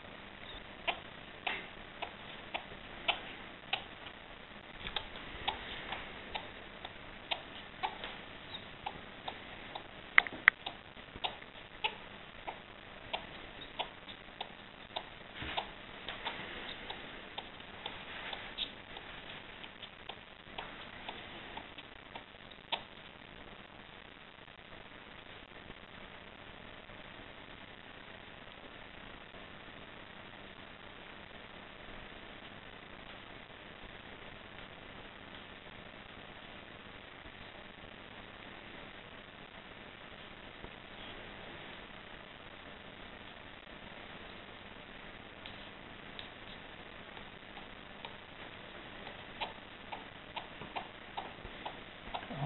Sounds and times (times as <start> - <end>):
Inside, small room: 0.0 - 52.4
Domestic animals, pets: 0.4 - 4.1, 4.8 - 23.1, 49.0 - 52.4.